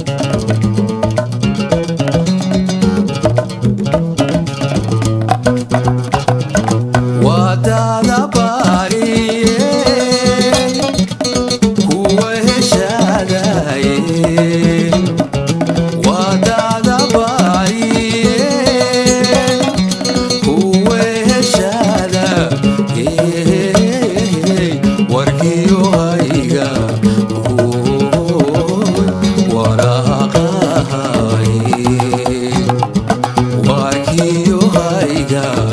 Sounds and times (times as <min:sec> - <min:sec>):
Music: 0:00.0 - 0:35.7
Singing: 0:07.2 - 0:11.1, 0:11.8 - 0:15.2, 0:15.8 - 0:32.8, 0:33.5 - 0:35.7.